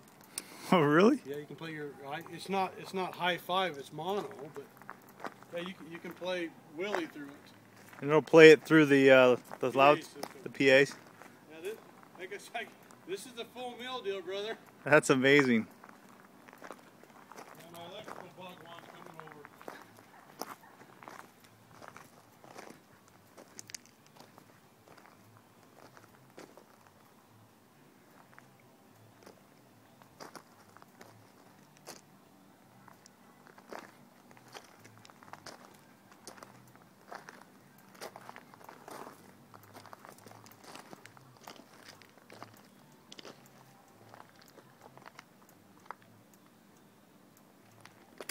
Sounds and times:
Crackle: 0:00.0 - 0:00.6, 0:15.7 - 0:27.2, 0:32.8 - 0:48.3.

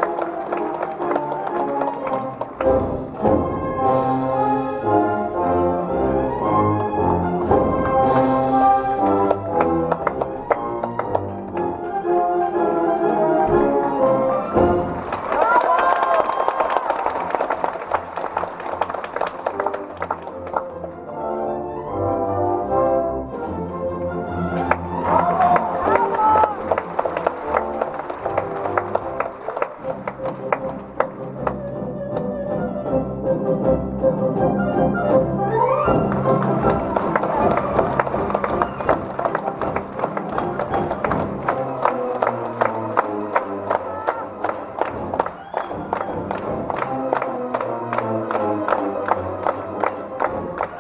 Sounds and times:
Music: 0:00.0 - 0:50.8.

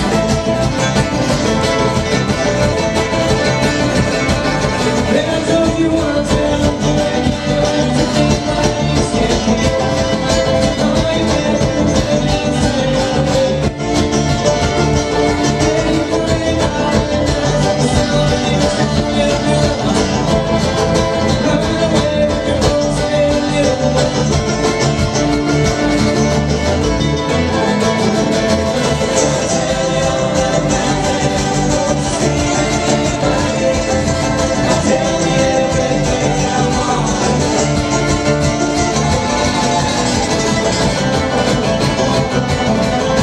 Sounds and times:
Singing: 0:00.0 - 0:26.2, 0:27.8 - 0:43.2
Bluegrass: 0:00.0 - 0:43.2.

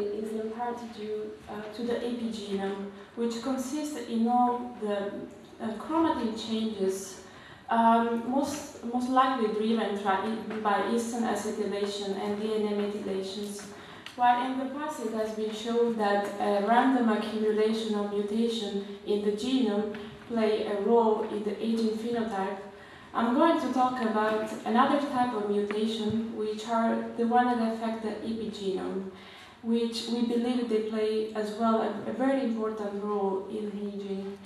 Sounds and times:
Speech: 0:00.0 - 0:34.4.

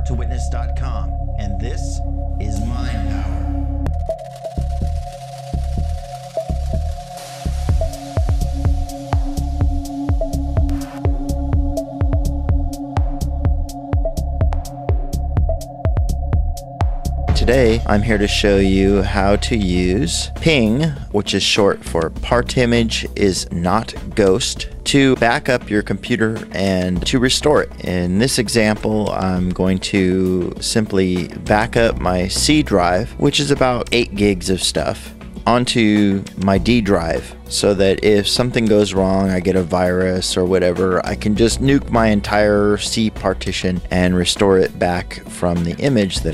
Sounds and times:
Speech: 0:00.0 - 0:03.4, 0:17.3 - 0:46.3
Music: 0:00.0 - 0:46.3.

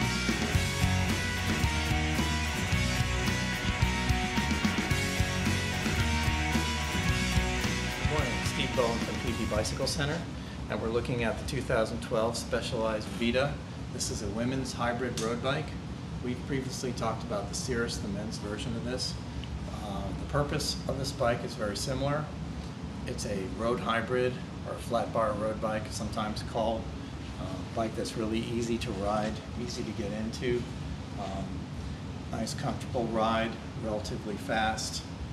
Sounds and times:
Speech: 0:08.1 - 0:22.4, 0:23.1 - 0:31.6, 0:32.3 - 0:35.1.

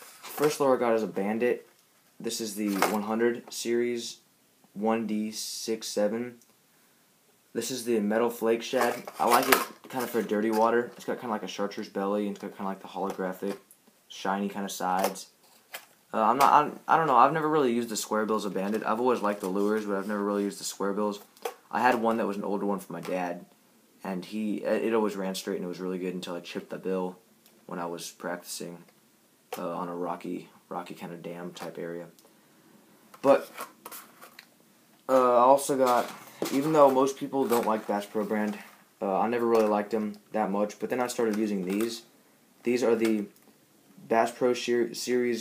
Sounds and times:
Inside, small room: 0:00.0 - 0:45.4
Speech: 0:00.3 - 0:04.2, 0:04.8 - 0:06.4, 0:07.6 - 0:15.4, 0:16.1 - 0:28.9, 0:29.5 - 0:32.2, 0:33.2 - 0:33.5, 0:35.1 - 0:43.4, 0:44.0 - 0:45.4.

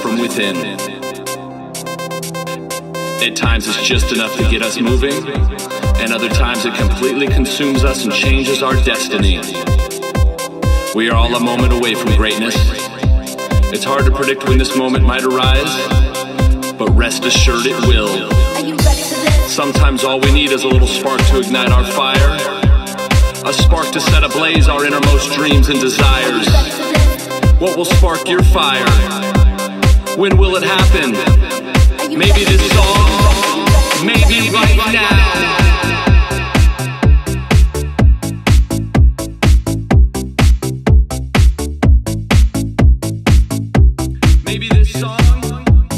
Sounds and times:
Speech: 0:00.0 - 0:01.0, 0:03.2 - 0:09.6, 0:11.0 - 0:13.0, 0:13.7 - 0:16.1, 0:16.8 - 0:22.6, 0:23.4 - 0:29.2, 0:30.2 - 0:31.4, 0:32.1 - 0:36.3, 0:44.4 - 0:45.8
Music: 0:00.0 - 0:45.9.

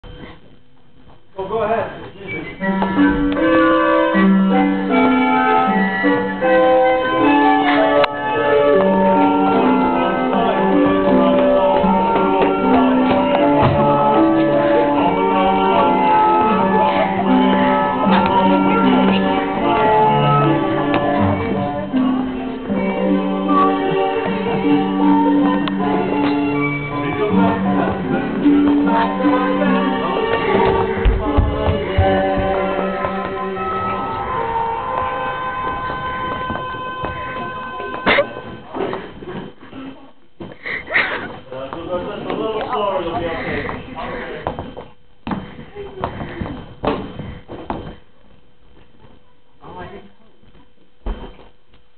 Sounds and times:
Music: 0:00.0 - 0:44.8
Inside, large room or hall: 0:00.0 - 0:51.9
Speech: 0:01.4 - 0:02.6.

